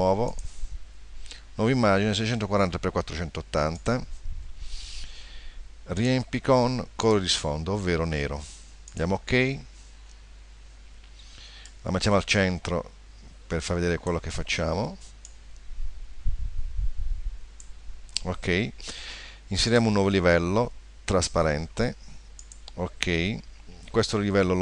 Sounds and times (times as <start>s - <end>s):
Speech: 0.0s - 0.4s, 1.6s - 4.1s, 5.9s - 9.7s, 11.8s - 15.1s, 18.2s - 18.8s, 19.5s - 22.0s, 22.7s - 24.6s.